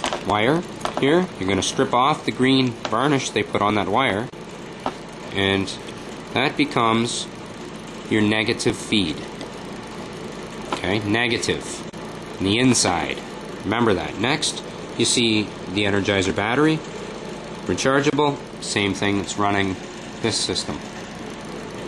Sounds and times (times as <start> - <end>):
Speech: 0.2 - 4.3, 5.3 - 7.3, 8.1 - 9.3, 10.8 - 16.9, 17.7 - 20.9.